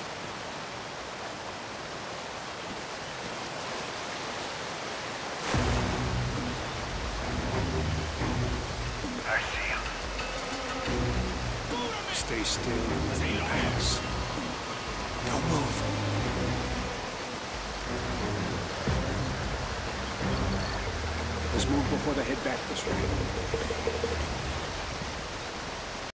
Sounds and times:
Waterfall: 0.0 - 26.1
Music: 5.6 - 25.1
Speech: 9.2 - 10.0, 11.7 - 14.1, 15.2 - 15.9, 21.6 - 23.2.

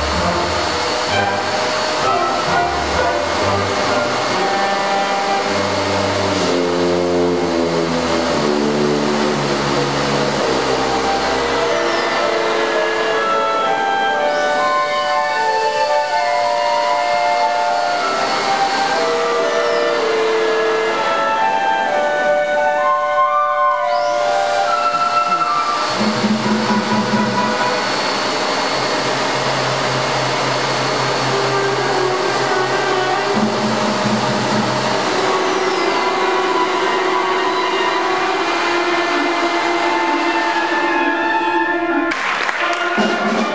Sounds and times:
Orchestra: 0.0 - 43.5
Vacuum cleaner: 0.0 - 43.5.

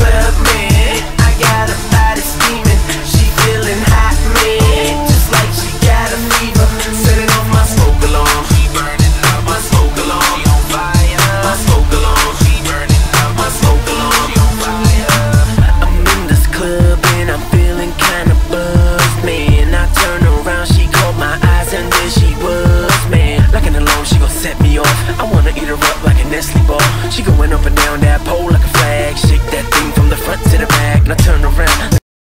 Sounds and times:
Music: 0.0 - 32.0.

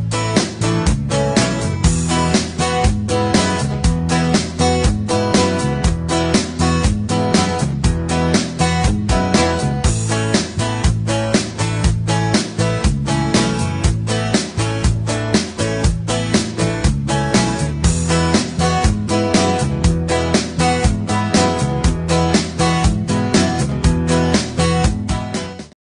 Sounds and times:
Music: 0.0 - 25.8.

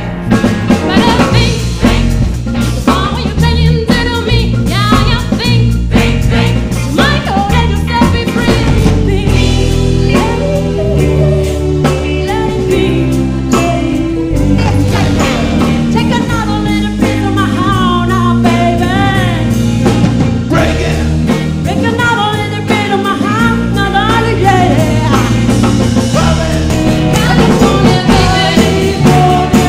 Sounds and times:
Rock and roll: 0.0 - 29.6.

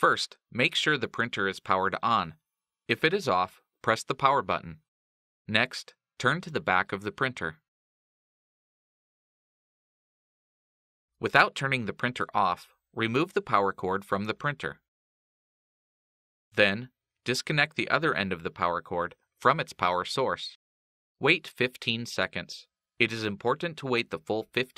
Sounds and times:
Speech: 0.0 - 4.9, 5.5 - 7.7, 11.2 - 14.9, 16.6 - 20.6, 21.2 - 24.7.

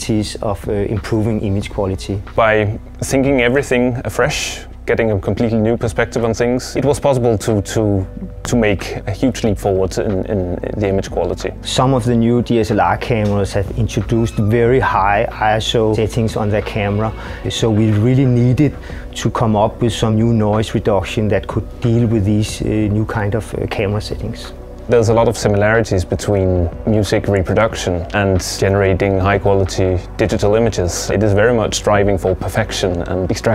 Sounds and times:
Music: 0.0 - 33.5
Speech: 0.0 - 33.5.

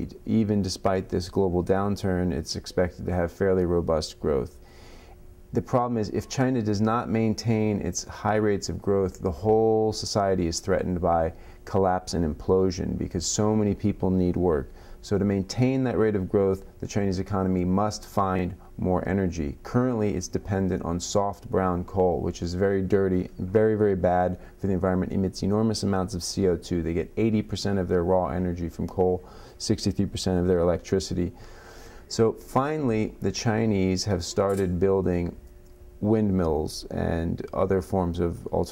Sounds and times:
Speech: 0.0 - 4.6, 5.5 - 31.4, 32.1 - 35.4, 36.0 - 38.7.

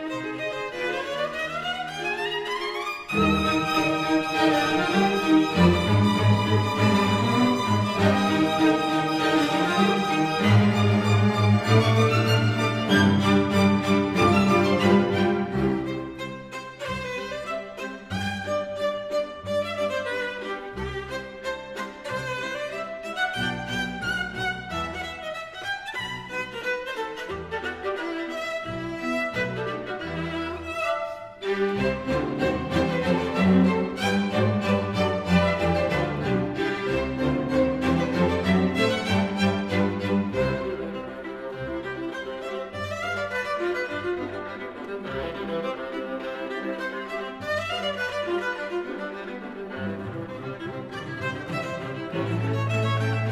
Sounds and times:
Cello: 0.0 - 53.3
Violin, fiddle: 0.0 - 53.3.

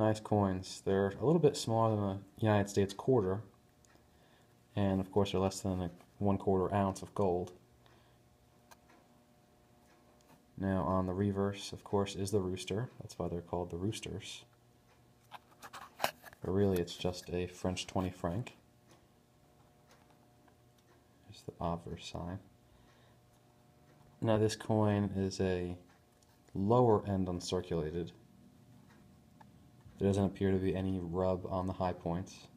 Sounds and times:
Speech: 0.0 - 3.5, 4.7 - 7.6, 10.6 - 14.5, 16.4 - 18.6, 21.2 - 22.5, 24.2 - 25.9, 26.5 - 28.2, 30.0 - 32.5.

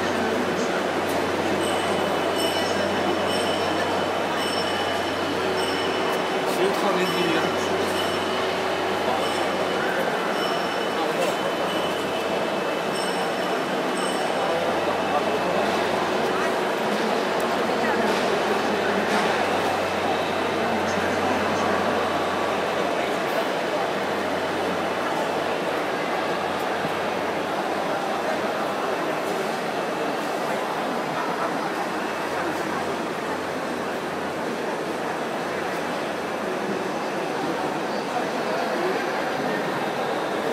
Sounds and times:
Speech: 0.0 - 40.5.

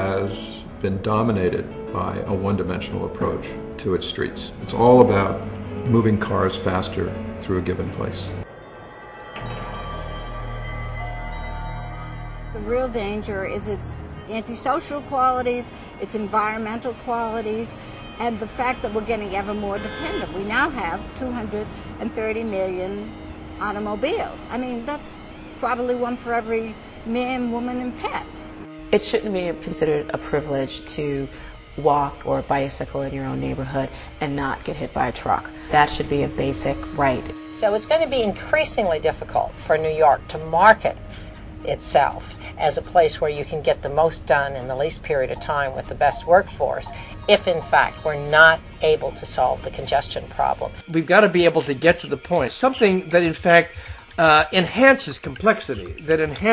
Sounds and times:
Music: 0.0 - 56.5
Speech: 41.7 - 56.5.

